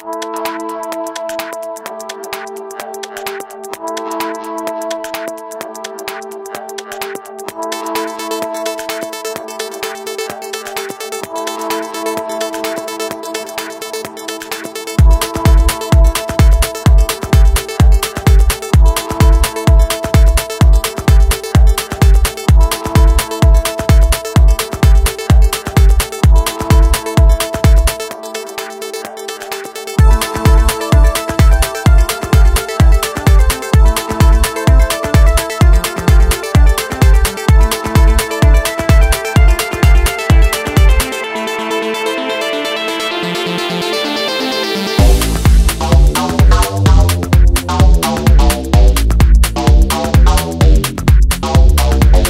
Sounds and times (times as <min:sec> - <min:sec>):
Music: 0:00.0 - 0:52.3.